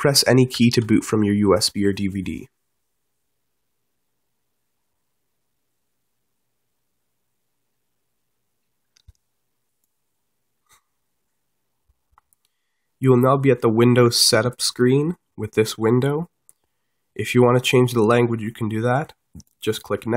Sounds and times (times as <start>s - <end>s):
Speech: 0.0s - 2.5s, 13.0s - 16.3s, 17.2s - 20.1s.